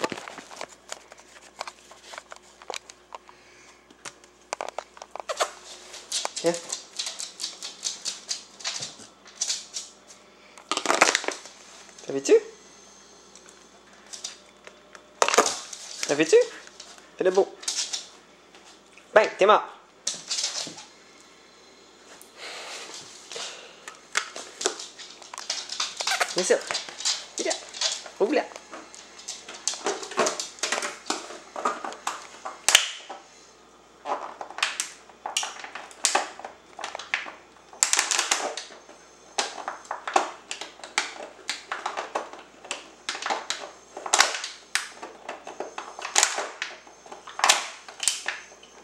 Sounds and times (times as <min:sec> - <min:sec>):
Speech: 0:06.4 - 0:06.7, 0:12.0 - 0:12.6, 0:16.0 - 0:16.6, 0:17.2 - 0:17.6, 0:19.1 - 0:19.8, 0:26.3 - 0:26.7, 0:27.4 - 0:27.6, 0:28.2 - 0:28.6.